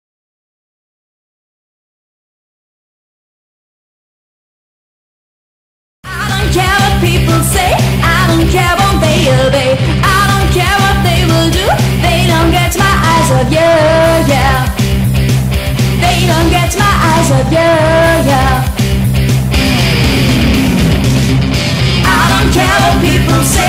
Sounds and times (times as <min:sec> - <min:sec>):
Music: 0:06.0 - 0:23.6.